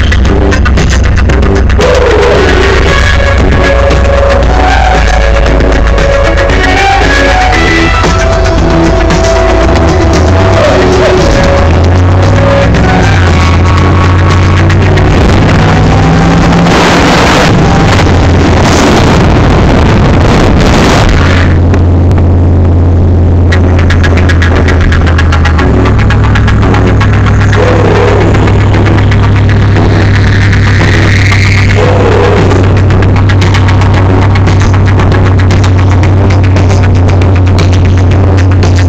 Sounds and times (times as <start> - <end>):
Car: 0.0 - 38.8
Music: 0.0 - 38.8.